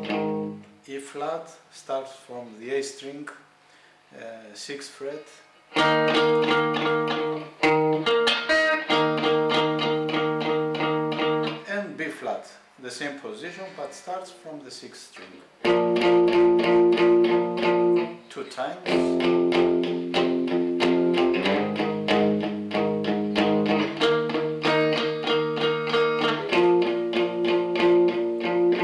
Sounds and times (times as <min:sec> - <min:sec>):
Electric guitar: 0:00.0 - 0:00.7, 0:05.7 - 0:11.7, 0:15.6 - 0:18.3, 0:18.9 - 0:28.8
Speech: 0:00.9 - 0:03.4, 0:04.1 - 0:05.5, 0:11.6 - 0:15.5, 0:18.3 - 0:19.2
Strum: 0:05.7 - 0:11.7, 0:15.2 - 0:28.8.